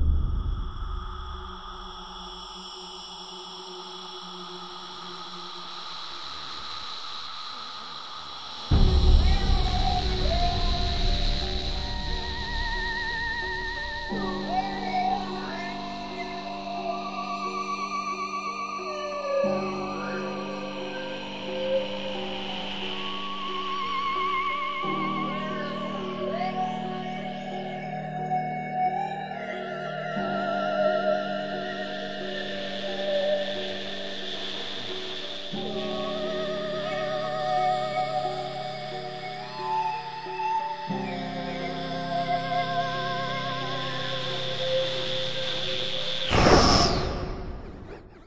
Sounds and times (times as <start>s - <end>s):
Music: 0.0s - 48.2s.